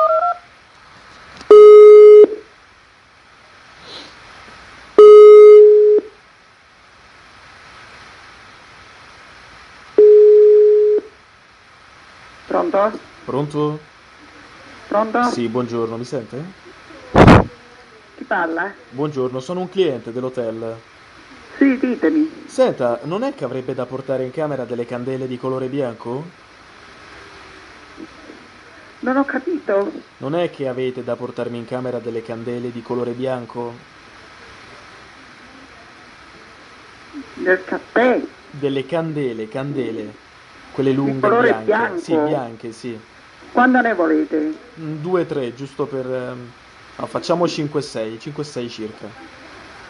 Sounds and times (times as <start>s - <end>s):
Speech: 28.7s - 33.8s, 40.8s - 49.7s.